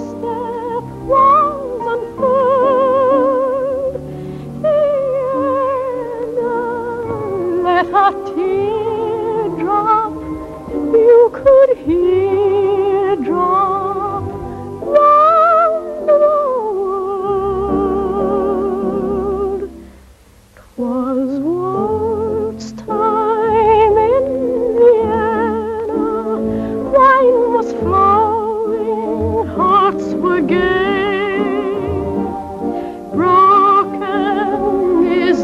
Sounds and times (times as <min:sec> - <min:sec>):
Opera: 0:00.0 - 0:35.4.